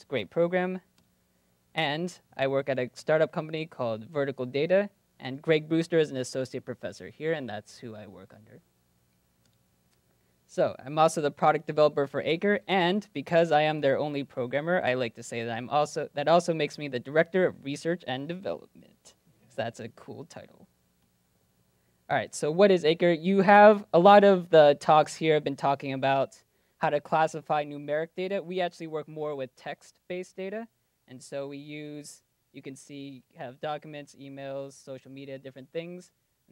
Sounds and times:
Speech: 0:00.0 - 0:00.9, 0:01.8 - 0:08.6, 0:10.5 - 0:20.7, 0:22.1 - 0:36.2.

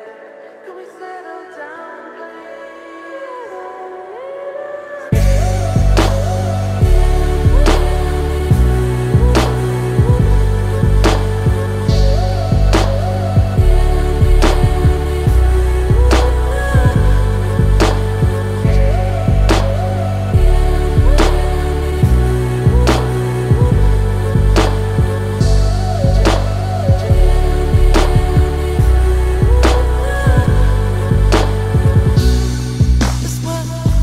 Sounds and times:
Music: 0:00.0 - 0:34.0.

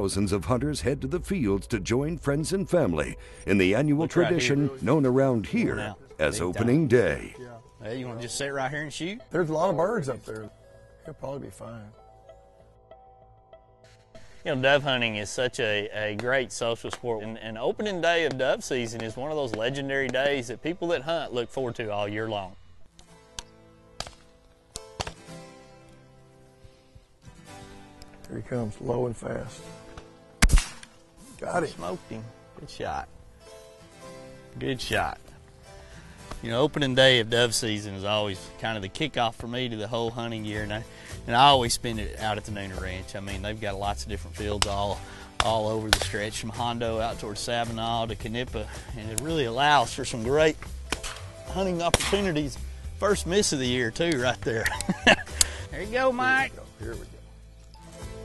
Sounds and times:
Speech: 0:00.0 - 0:10.5, 0:28.3 - 0:29.6, 0:36.4 - 0:50.6
Music: 0:00.0 - 0:58.2.

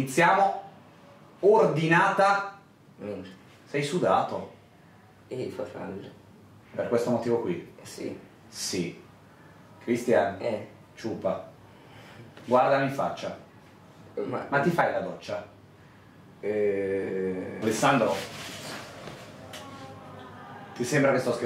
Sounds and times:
Speech: 0:00.0 - 0:00.7, 0:01.4 - 0:04.6, 0:05.3 - 0:09.0, 0:09.8 - 0:11.5, 0:12.5 - 0:13.5, 0:14.2 - 0:15.6, 0:16.4 - 0:18.4, 0:19.4 - 0:21.4.

